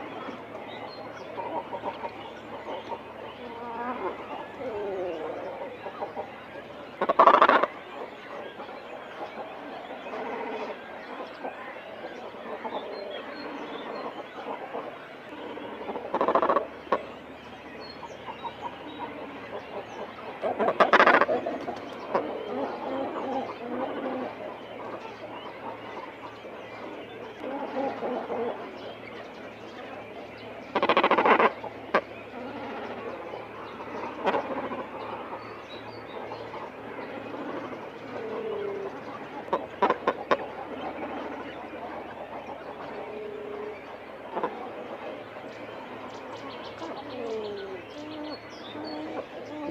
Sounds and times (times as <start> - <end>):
Bird vocalization, bird call, bird song: 0.0 - 49.7.